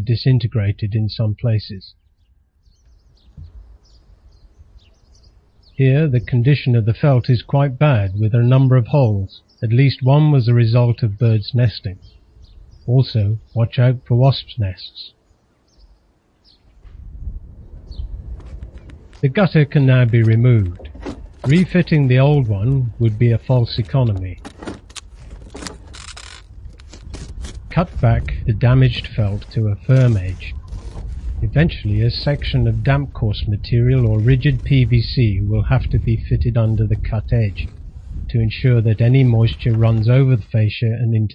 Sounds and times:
Speech: 0.0s - 2.0s, 5.8s - 12.0s, 12.9s - 15.2s, 19.2s - 24.4s, 27.7s - 30.6s, 31.4s - 41.3s.

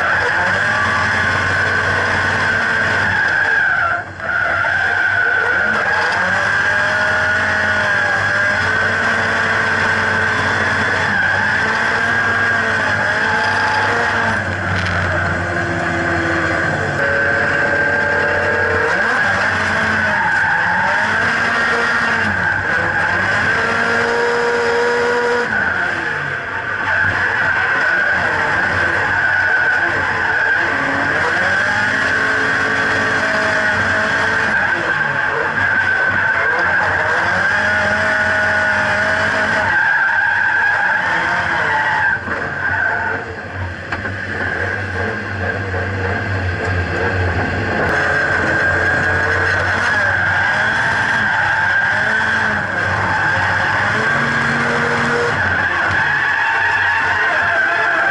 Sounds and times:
Race car, auto racing: 0.0s - 58.1s
Skidding: 0.0s - 58.1s.

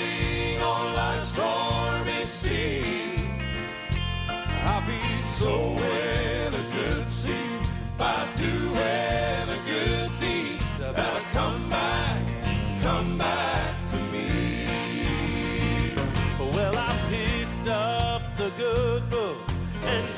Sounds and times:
Music: 0.0s - 20.1s.

